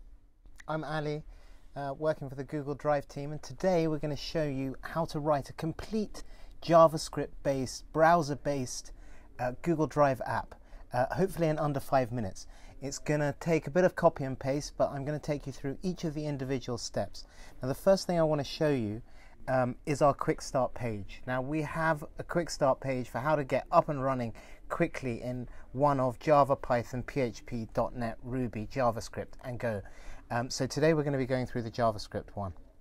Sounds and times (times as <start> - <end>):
Speech: 0.6 - 32.7.